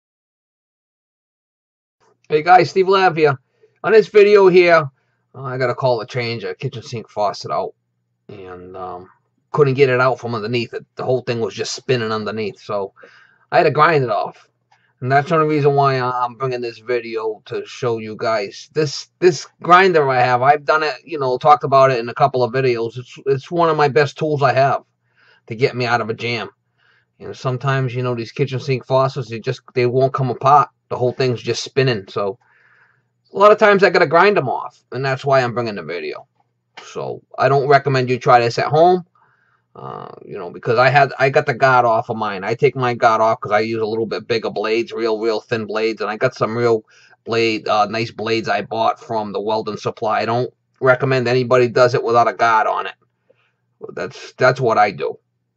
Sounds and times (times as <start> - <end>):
Speech: 2.3 - 7.7, 8.3 - 14.4, 15.0 - 24.8, 25.5 - 26.5, 27.2 - 32.4, 33.4 - 36.2, 36.8 - 39.0, 39.8 - 52.9, 53.8 - 55.2.